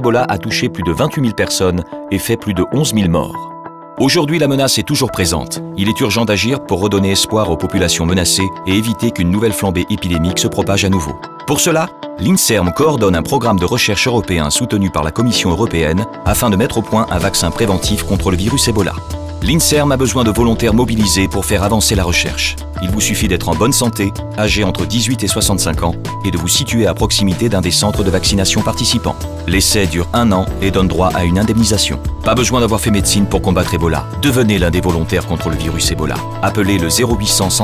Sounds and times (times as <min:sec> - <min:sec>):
Music: 0:00.0 - 0:37.6
Speech: 0:00.0 - 0:37.6.